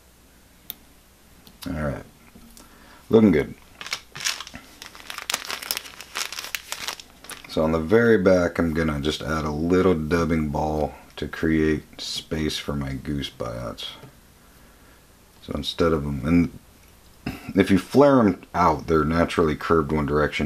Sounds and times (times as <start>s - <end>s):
Speech: 1.6s - 2.1s, 3.1s - 3.6s, 7.5s - 14.1s, 15.4s - 16.6s, 17.3s - 20.4s
Crumpling, crinkling: 3.6s - 7.6s.